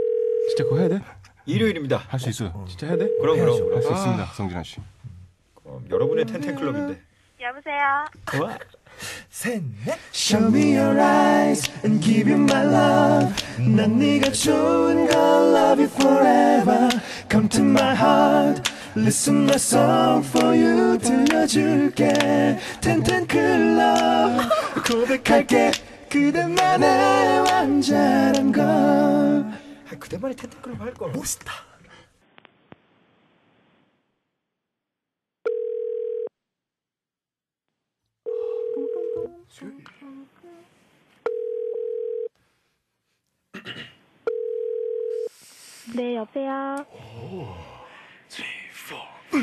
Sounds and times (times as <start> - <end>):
Dial tone: 35.5 - 36.3, 38.3 - 39.3, 41.3 - 42.3, 44.3 - 45.3.